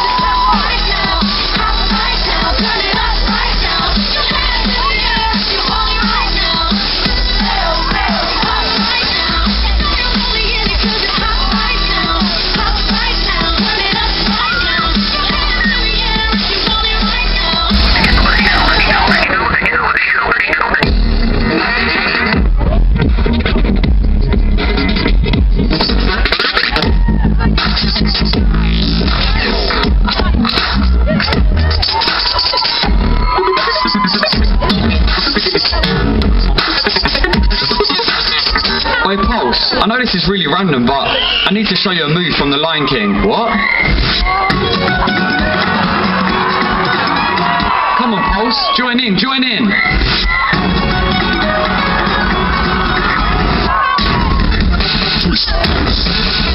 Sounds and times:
Crowd: 0:00.0 - 0:56.5
Pop music: 0:00.0 - 0:56.5.

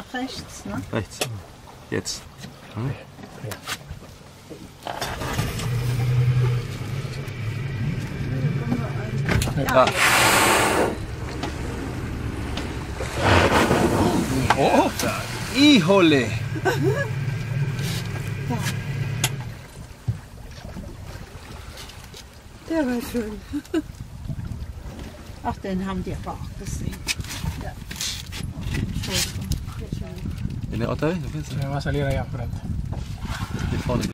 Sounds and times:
Boat, Water vehicle: 0:00.0 - 0:34.1.

